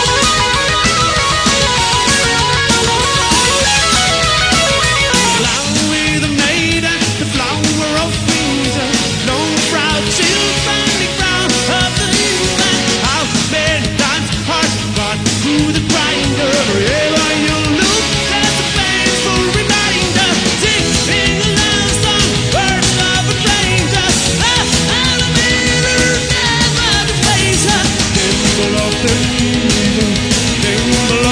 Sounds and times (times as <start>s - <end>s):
Music: 0.0s - 31.3s.